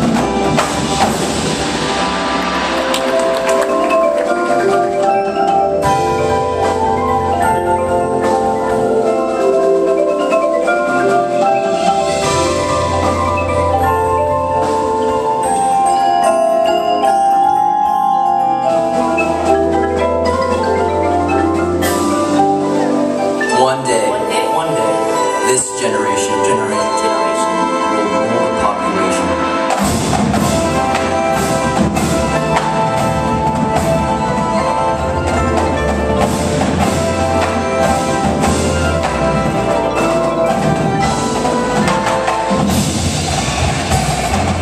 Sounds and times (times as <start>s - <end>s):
Percussion: 0.0s - 44.6s
Speech: 23.5s - 29.5s.